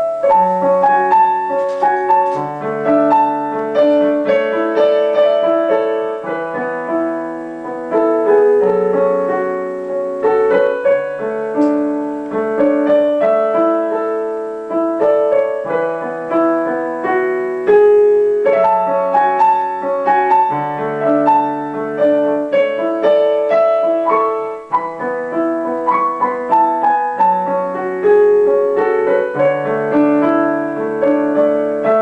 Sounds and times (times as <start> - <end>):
Piano: 0.0 - 32.0.